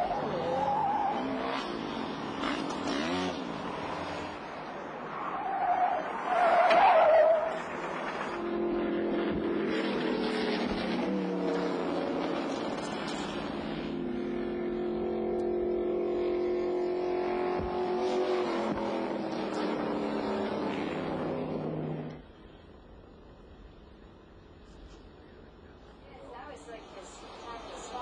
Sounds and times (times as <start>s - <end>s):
Car: 0.0s - 28.0s.